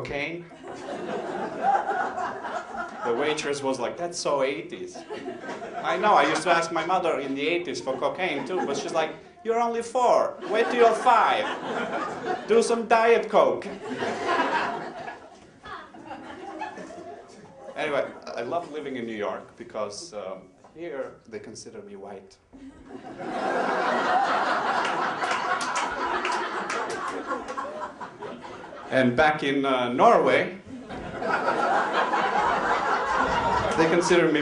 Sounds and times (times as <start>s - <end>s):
Speech: 0.0s - 0.5s, 3.0s - 5.1s, 5.8s - 11.6s, 12.5s - 13.8s, 17.6s - 22.4s, 28.9s - 30.6s, 33.7s - 34.4s
Laughter: 0.5s - 3.5s, 5.0s - 6.6s, 7.4s - 9.2s, 10.4s - 12.6s, 13.6s - 18.4s, 22.6s - 29.0s, 30.7s - 34.4s.